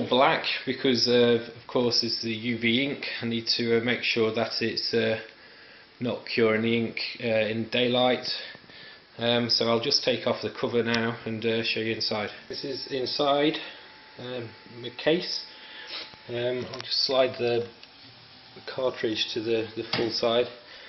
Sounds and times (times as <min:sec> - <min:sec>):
Speech: 0:00.0 - 0:05.4, 0:06.0 - 0:08.6, 0:09.2 - 0:15.5, 0:16.3 - 0:17.8, 0:18.6 - 0:20.6.